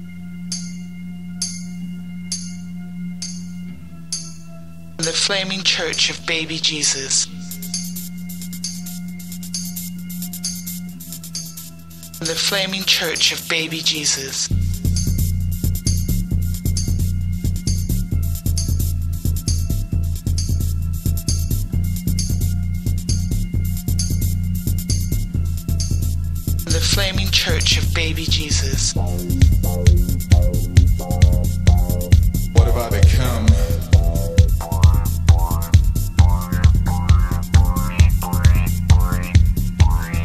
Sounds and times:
Music: 0:00.0 - 0:40.2
Speech: 0:05.0 - 0:07.4, 0:12.2 - 0:14.5, 0:26.7 - 0:29.0, 0:32.6 - 0:33.8.

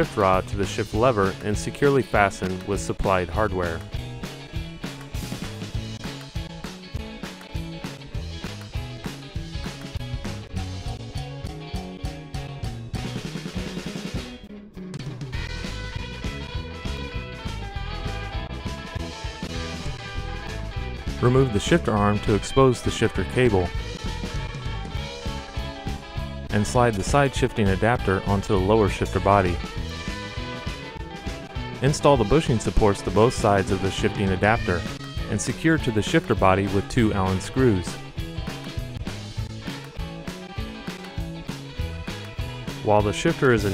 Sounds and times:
Drum: 0:02.2 - 0:27.3, 0:27.9 - 0:43.7.

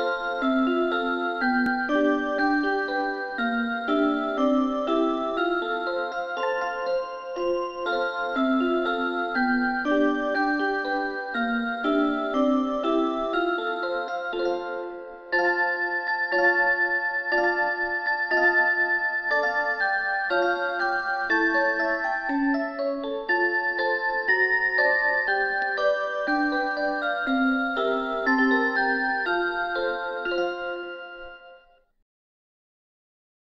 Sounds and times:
Music: 0:00.0 - 0:32.0.

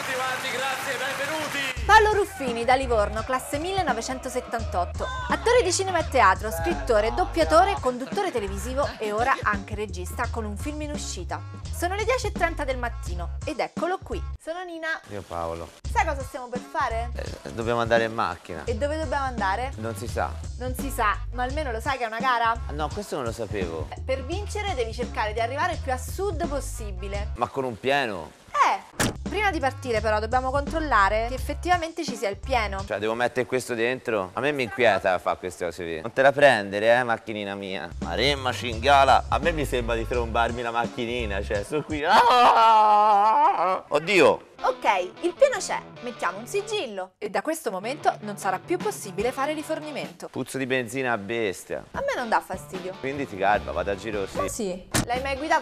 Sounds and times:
Speech: 0:00.0 - 0:11.1, 0:14.8 - 0:42.2, 0:46.4 - 0:55.6
Music: 0:00.0 - 0:55.6.

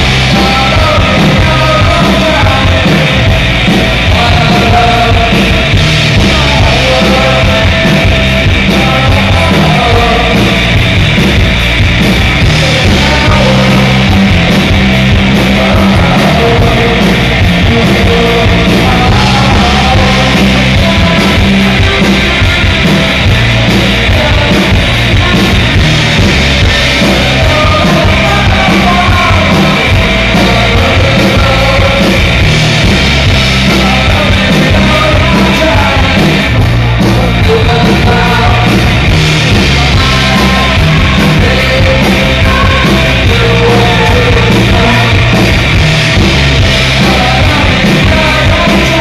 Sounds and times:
Music: 0:00.0 - 0:49.0.

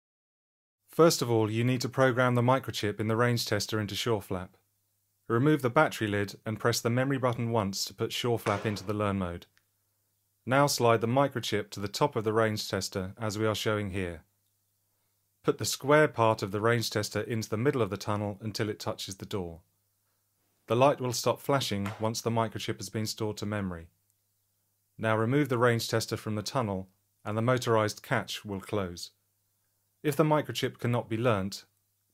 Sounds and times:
Speech: 0:00.9 - 0:04.6, 0:05.3 - 0:09.5, 0:10.5 - 0:14.3, 0:15.4 - 0:19.6, 0:20.7 - 0:23.9, 0:25.0 - 0:29.2, 0:30.0 - 0:31.7.

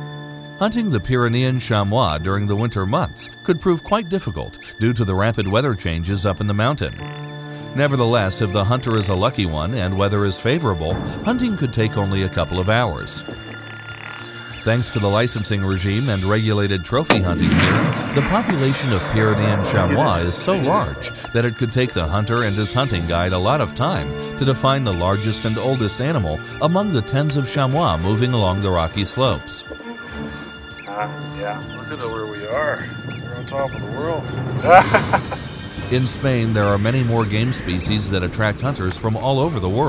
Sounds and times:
Music: 0:00.0 - 0:39.8
Speech: 0:00.6 - 0:07.0, 0:07.7 - 0:13.2, 0:14.6 - 0:30.0, 0:30.9 - 0:34.4, 0:35.9 - 0:39.8.

